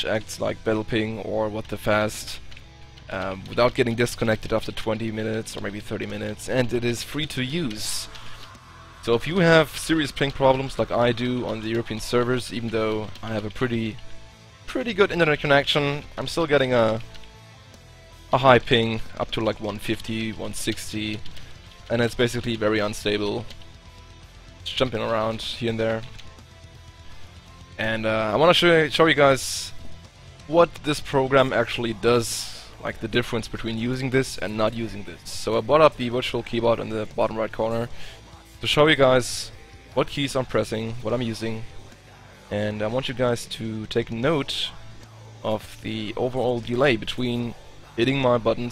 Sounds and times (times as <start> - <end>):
Speech: 0.0 - 2.4, 3.1 - 8.2, 9.0 - 14.0, 14.7 - 17.1, 18.3 - 21.3, 21.9 - 23.5, 24.6 - 26.2, 27.8 - 29.9, 30.5 - 38.0, 38.6 - 41.8, 42.5 - 44.8, 45.4 - 48.7
Music: 0.0 - 48.7.